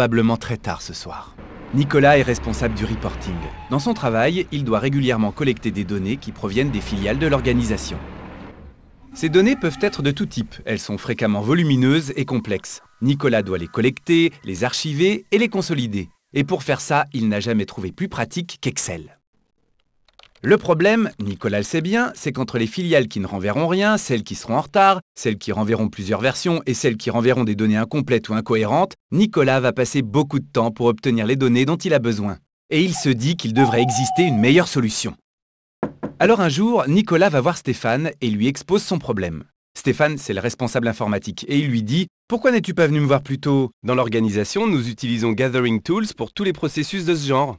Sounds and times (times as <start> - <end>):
Speech: 0.0 - 8.0, 9.2 - 19.2, 20.4 - 35.2, 36.2 - 47.5.